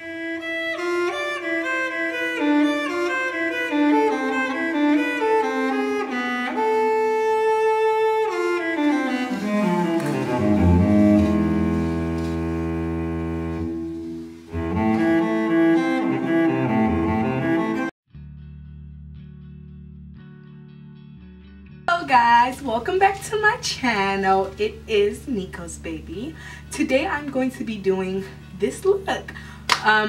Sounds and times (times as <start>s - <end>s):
String section: 0.0s - 17.9s.